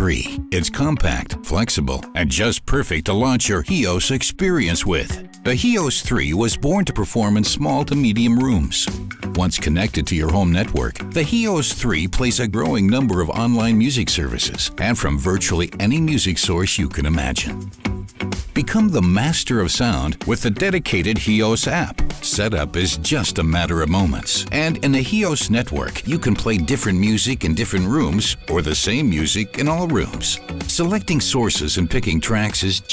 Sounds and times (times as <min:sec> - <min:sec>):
Speech: 0:00.0 - 0:17.6, 0:18.6 - 0:32.9
Music: 0:00.0 - 0:32.9.